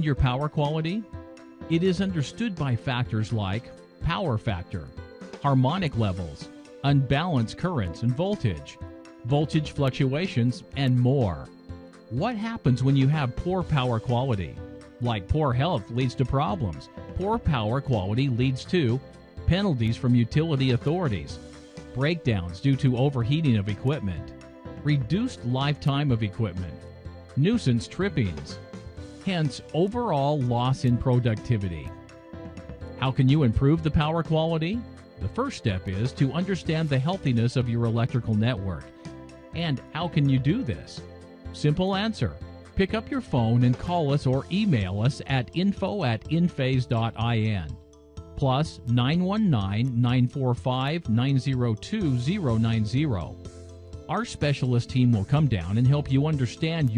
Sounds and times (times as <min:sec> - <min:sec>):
Speech: 0:00.0 - 0:01.1, 0:01.7 - 0:11.5, 0:12.1 - 0:21.4, 0:22.0 - 0:26.8, 0:27.4 - 0:28.6, 0:29.3 - 0:31.9, 0:33.0 - 0:38.9, 0:39.6 - 0:47.8, 0:48.4 - 0:53.4, 0:54.1 - 0:56.9
Music: 0:00.0 - 0:56.9.